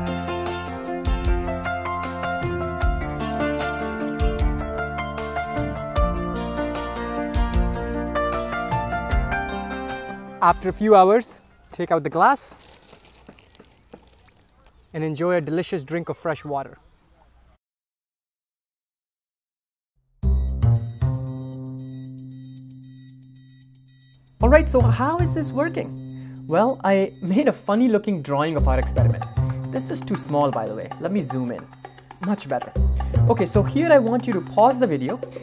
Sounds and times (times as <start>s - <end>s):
Music: 0.0s - 11.7s, 20.2s - 35.4s
Speech: 10.4s - 12.6s, 14.9s - 16.9s, 24.4s - 25.9s, 26.5s - 31.6s, 32.2s - 32.7s, 33.3s - 35.4s.